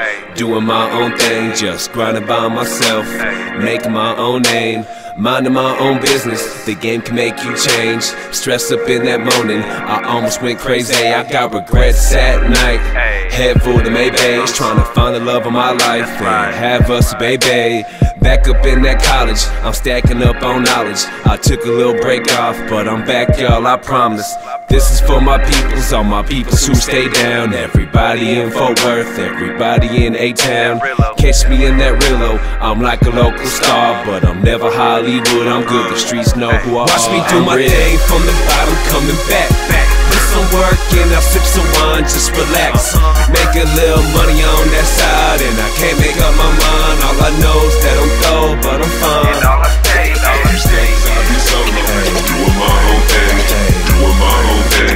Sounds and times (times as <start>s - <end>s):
Music: 0.0s - 54.9s.